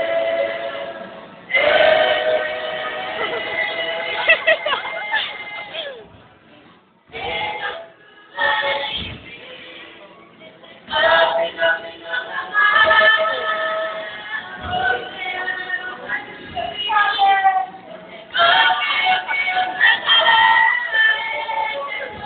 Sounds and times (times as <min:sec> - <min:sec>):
Singing: 0:00.0 - 0:06.2, 0:07.1 - 0:22.2
Inside, large room or hall: 0:00.0 - 0:22.2
Music: 0:00.0 - 0:22.2.